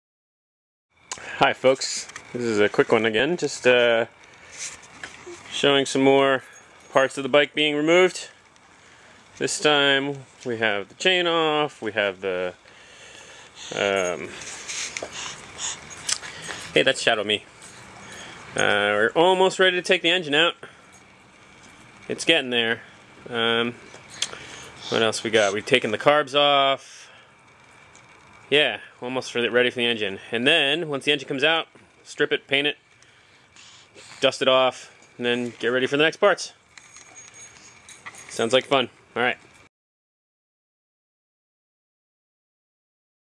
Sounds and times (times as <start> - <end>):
Speech: 1.4 - 4.1, 5.5 - 8.4, 9.4 - 12.6, 13.7 - 14.4, 16.8 - 17.4, 18.6 - 20.6, 22.1 - 23.8, 24.8 - 27.1, 28.5 - 32.8, 34.2 - 36.6, 38.3 - 39.4.